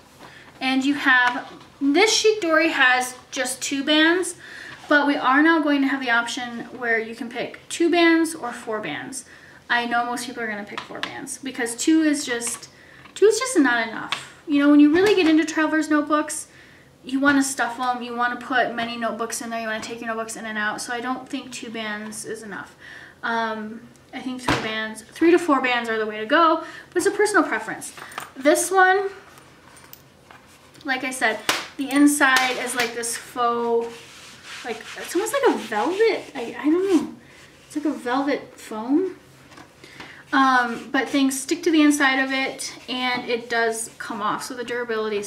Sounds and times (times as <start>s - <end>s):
Rub: 33.6s - 38.1s.